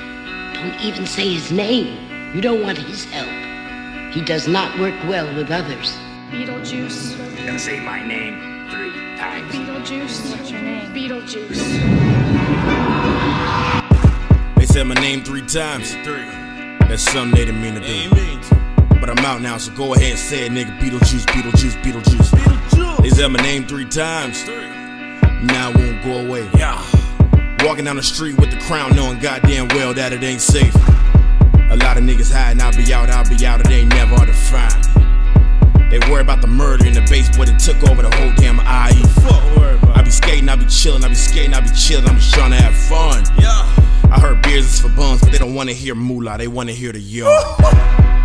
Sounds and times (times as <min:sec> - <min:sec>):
Music: 0:00.0 - 0:48.2.